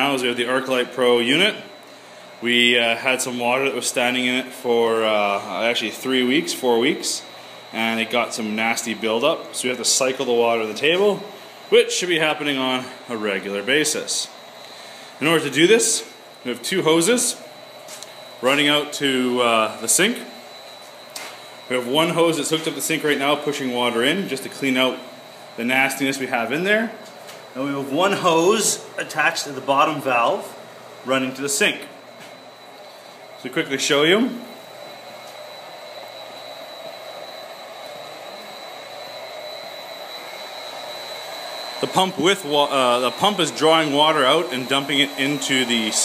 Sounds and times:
Speech: 0.0 - 1.7, 2.4 - 14.4, 15.2 - 17.4, 18.4 - 20.4, 21.7 - 27.0, 27.6 - 32.0, 33.4 - 34.5, 41.8 - 46.0.

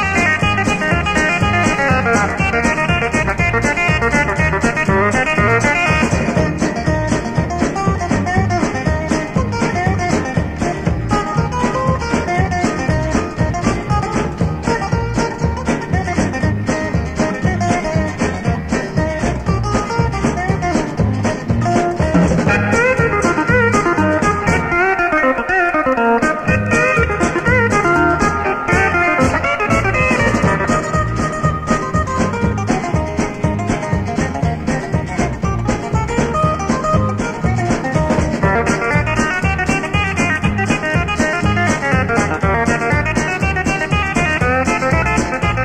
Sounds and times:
Middle Eastern music: 0.0 - 45.6.

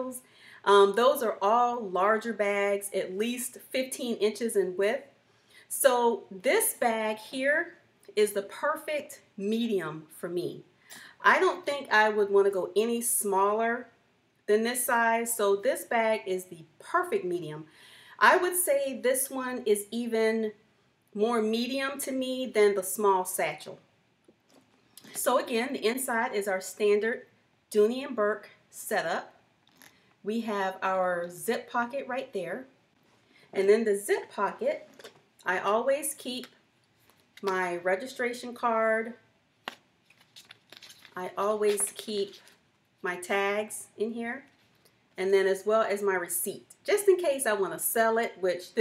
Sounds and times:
Speech: 0.0 - 5.1, 5.7 - 13.9, 14.5 - 20.6, 21.2 - 23.8, 25.2 - 29.4, 30.3 - 32.7, 33.6 - 36.6, 37.4 - 39.2, 41.2 - 42.4, 43.1 - 44.5, 45.2 - 48.8.

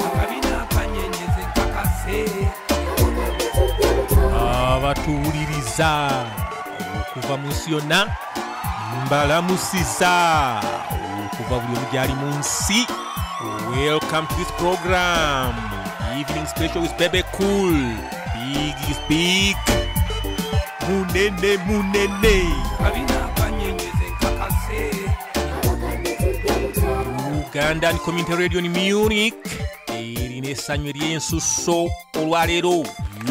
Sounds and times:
Music: 0.0 - 33.3
Speech: 4.3 - 6.4, 7.2 - 8.1, 9.0 - 19.6, 20.8 - 23.7, 27.5 - 33.3.

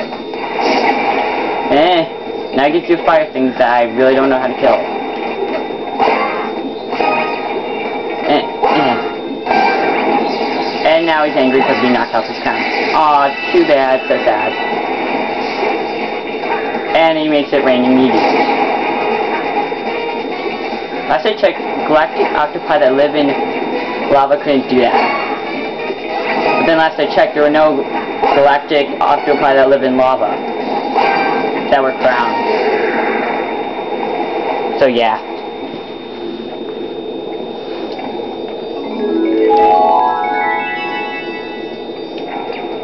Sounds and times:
Marimba, xylophone: 39.0 - 41.7.

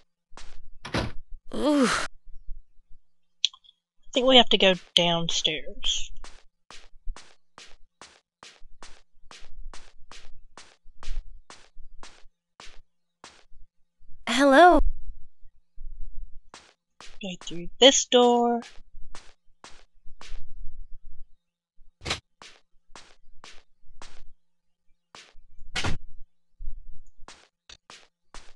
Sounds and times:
Speech: 1.6 - 2.1, 4.2 - 6.1, 14.3 - 14.8, 17.2 - 18.6.

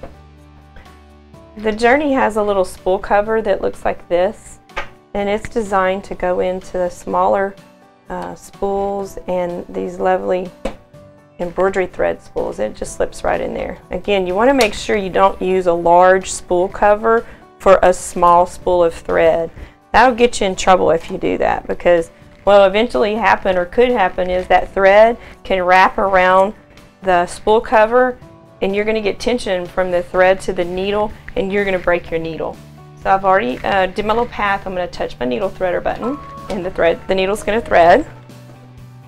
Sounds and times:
Music: 0.0 - 39.0
Speech: 1.6 - 4.6, 5.2 - 10.5, 11.4 - 38.1.

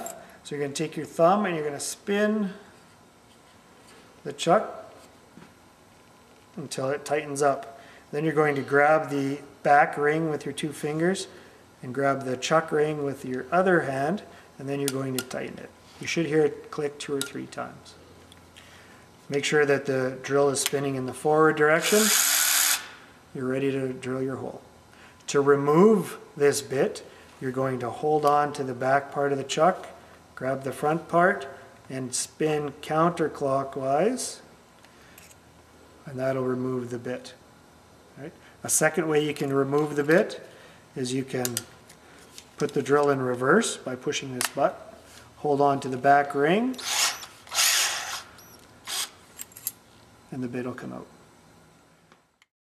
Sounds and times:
Speech: 0.0 - 2.6, 4.2 - 4.9, 6.6 - 18.0, 19.3 - 22.2, 23.4 - 24.7, 25.3 - 34.5, 36.0 - 37.4, 38.2 - 40.4, 41.0 - 41.7, 42.6 - 46.8, 50.3 - 51.2
Drill: 21.8 - 23.0, 46.8 - 49.2.

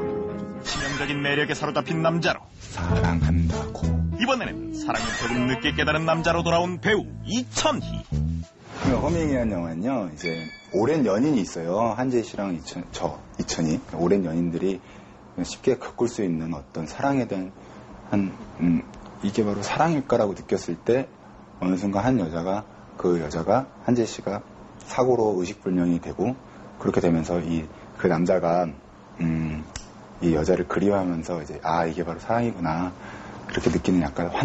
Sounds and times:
Speech: 4.2 - 8.0, 8.9 - 14.8, 15.4 - 34.4.

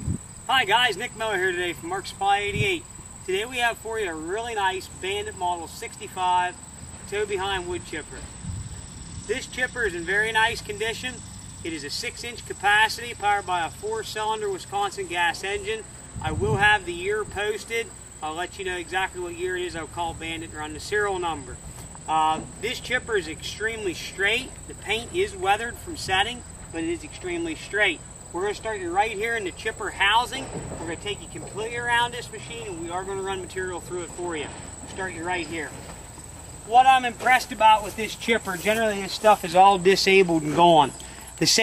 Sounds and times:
Speech: 0.5 - 8.2, 9.3 - 35.8, 36.7 - 41.6.

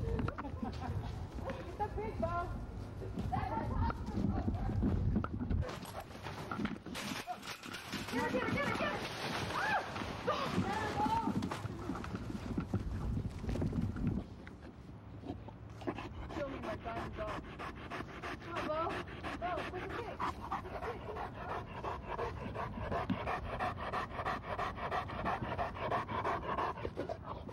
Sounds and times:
Speech: 8.1 - 9.1, 10.4 - 11.4, 16.3 - 17.4, 18.5 - 21.1.

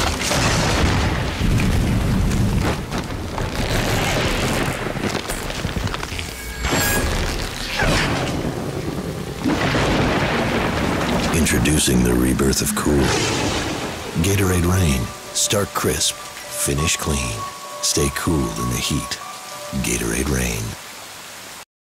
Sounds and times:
Thunder: 0.0 - 5.5, 7.7 - 12.2, 13.0 - 14.2
Rain: 0.0 - 21.7.

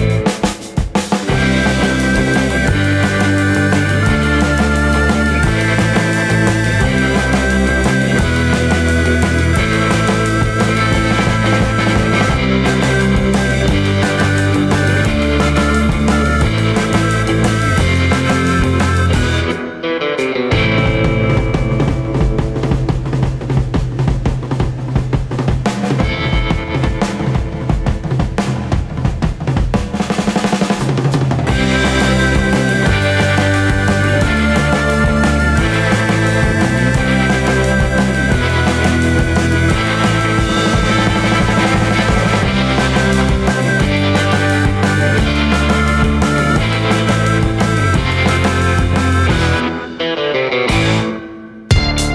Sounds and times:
Bass drum: 0.0 - 19.5, 20.6 - 49.6, 51.7 - 52.1
Drum roll: 0.0 - 19.6, 20.5 - 52.1
Drum kit: 0.0 - 52.1.

